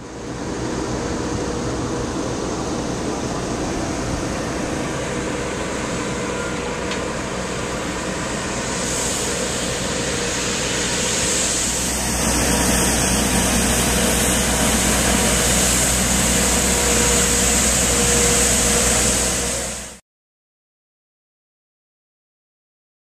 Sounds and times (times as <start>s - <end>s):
Motor vehicle (road): 0.0s - 20.0s.